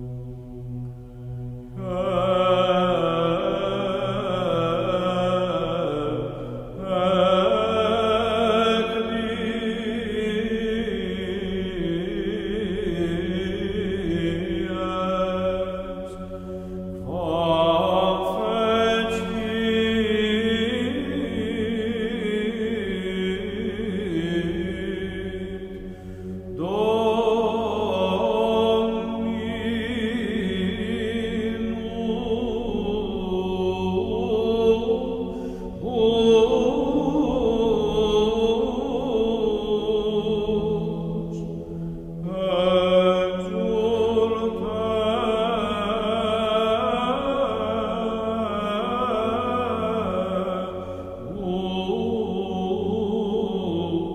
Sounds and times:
Mantra: 0:01.8 - 0:16.2, 0:17.0 - 0:25.7, 0:26.6 - 0:41.6, 0:42.2 - 0:54.1.

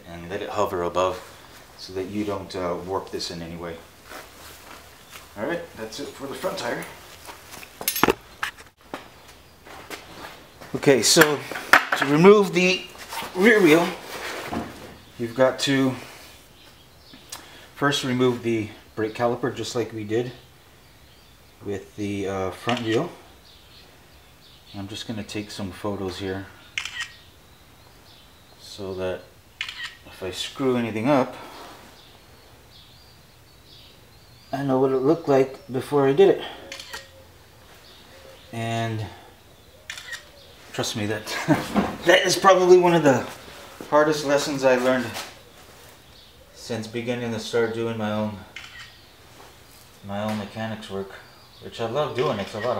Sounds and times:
Speech: 0:00.0 - 0:01.2, 0:01.8 - 0:03.9, 0:05.4 - 0:07.0, 0:10.7 - 0:14.0, 0:15.2 - 0:16.1, 0:17.8 - 0:20.4, 0:21.6 - 0:23.2, 0:24.7 - 0:26.6, 0:28.6 - 0:29.3, 0:30.1 - 0:31.4, 0:34.5 - 0:36.6, 0:38.5 - 0:39.2, 0:40.7 - 0:45.3, 0:46.6 - 0:48.6, 0:50.0 - 0:52.7.

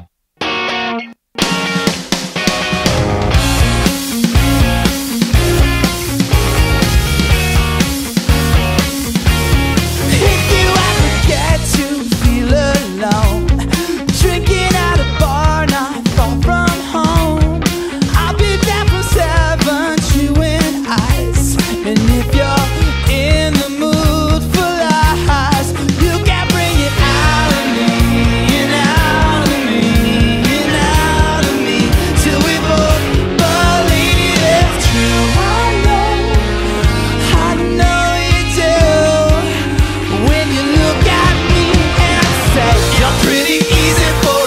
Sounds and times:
Music: 0:00.0 - 0:44.4.

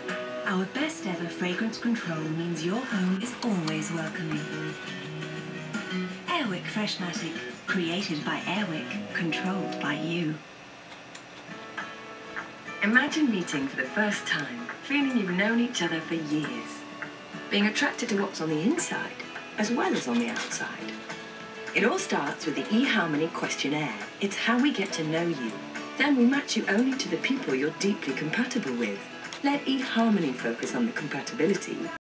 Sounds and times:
Music: 0:00.0 - 0:32.0
Speech: 0:00.5 - 0:04.6, 0:06.3 - 0:10.4, 0:12.8 - 0:16.8, 0:17.5 - 0:21.0, 0:21.8 - 0:32.0.

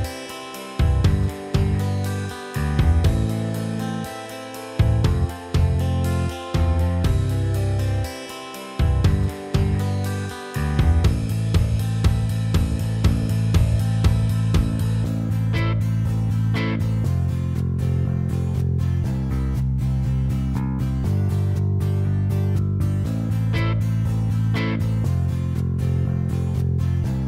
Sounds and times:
Music: 0:00.0 - 0:27.2.

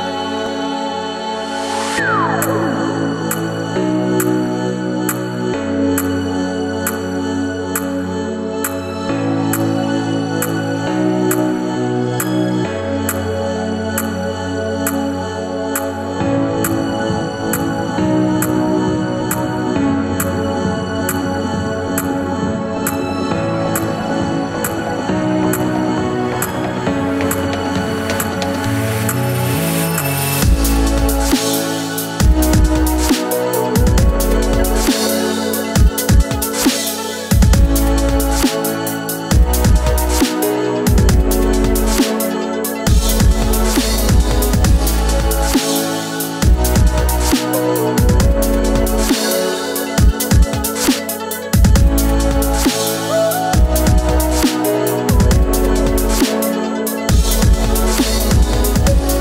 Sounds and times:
Music: 0:00.0 - 0:59.2.

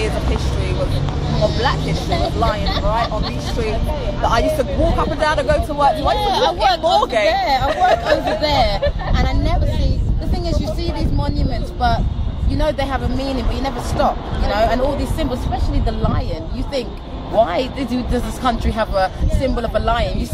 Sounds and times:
Female speech, woman speaking: 0:00.0 - 0:20.3
Hubbub, speech noise, speech babble: 0:00.0 - 0:20.3.

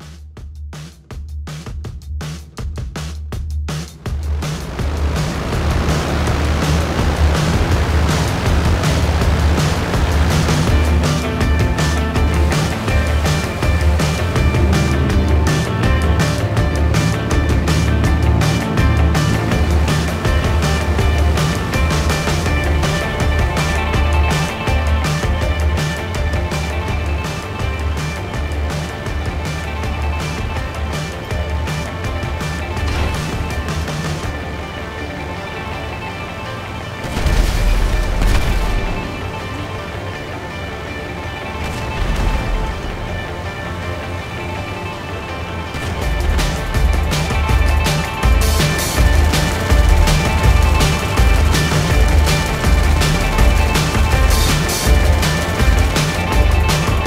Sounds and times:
Music: 0:00.0 - 0:57.0
Helicopter: 0:04.0 - 0:57.0.

